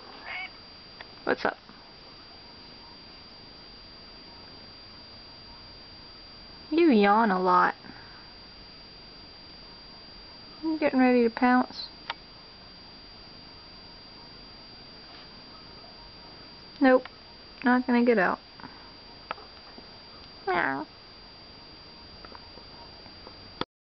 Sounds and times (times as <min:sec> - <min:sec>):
Speech: 0:01.3 - 0:01.6, 0:06.7 - 0:07.8, 0:10.6 - 0:11.9, 0:16.8 - 0:17.0, 0:17.6 - 0:18.4, 0:20.5 - 0:20.9.